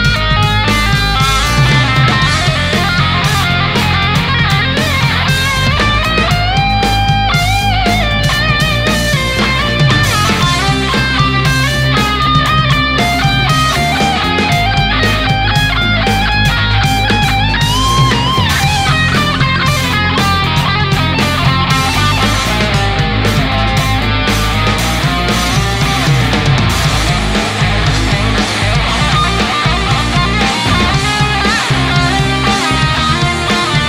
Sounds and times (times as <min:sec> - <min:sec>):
Electric guitar: 0:00.0 - 0:33.8.